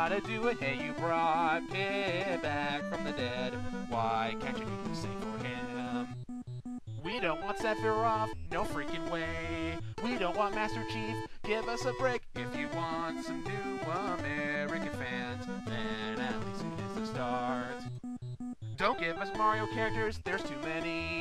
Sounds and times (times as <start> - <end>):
Funny music: 0.0 - 21.2.